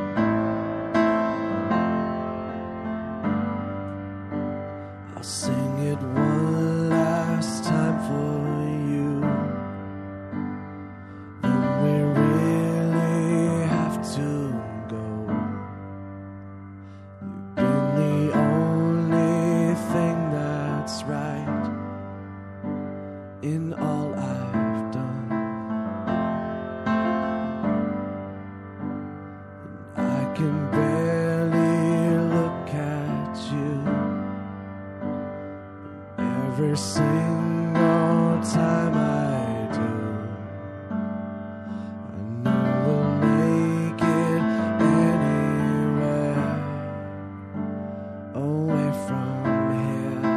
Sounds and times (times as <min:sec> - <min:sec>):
Music: 0:00.0 - 0:50.3.